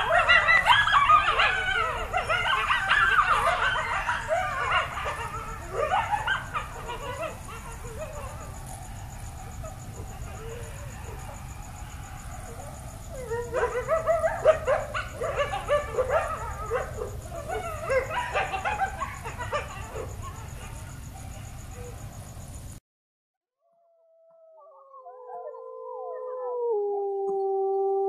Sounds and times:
Whimper (dog): 0:00.0 - 0:08.8, 0:09.4 - 0:22.0.

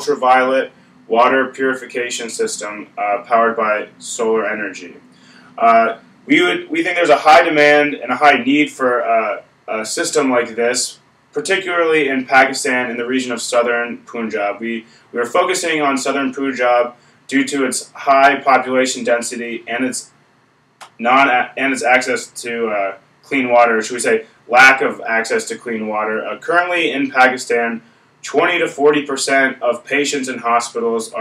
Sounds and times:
Speech: 0:00.0 - 0:20.2, 0:20.8 - 0:31.2.

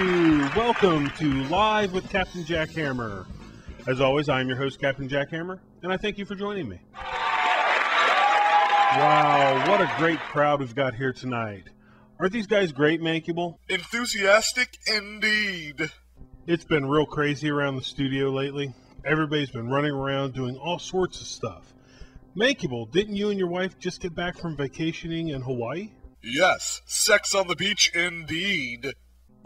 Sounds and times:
Speech: 0:00.0 - 0:03.3, 0:03.9 - 0:06.8, 0:09.0 - 0:21.7, 0:22.4 - 0:29.0.

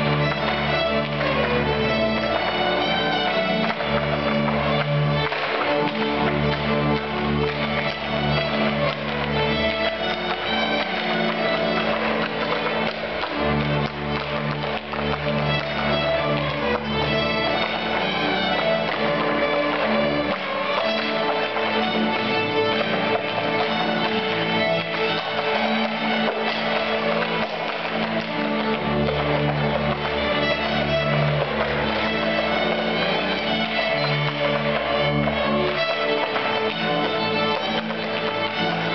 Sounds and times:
Violin, fiddle: 0:00.0 - 0:38.9.

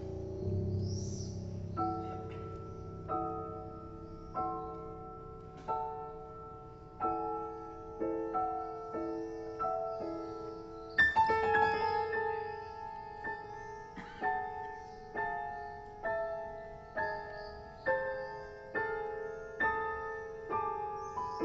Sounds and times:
Piano: 0:00.0 - 0:21.4.

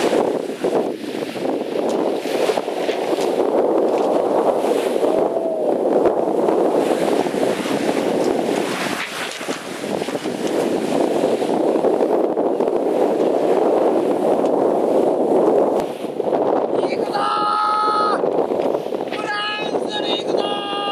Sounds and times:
Speech: 0:16.8 - 0:18.2, 0:19.1 - 0:20.9.

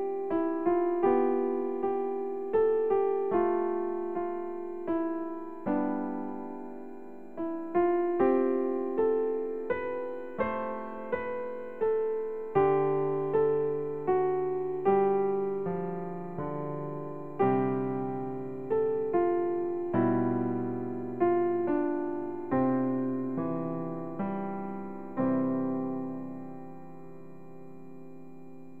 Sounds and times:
Piano: 0:00.0 - 0:28.8.

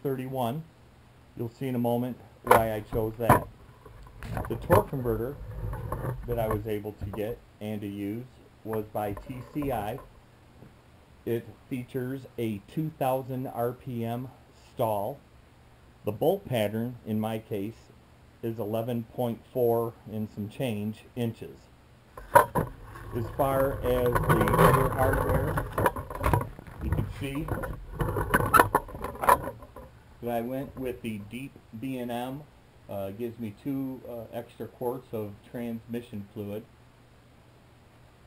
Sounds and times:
Speech: 0:00.0 - 0:00.7, 0:01.4 - 0:03.5, 0:04.4 - 0:05.4, 0:06.2 - 0:10.1, 0:11.2 - 0:15.2, 0:16.0 - 0:21.7, 0:23.2 - 0:25.8, 0:26.8 - 0:27.7, 0:29.2 - 0:29.4, 0:30.2 - 0:36.7
Inside, small room: 0:00.0 - 0:38.2.

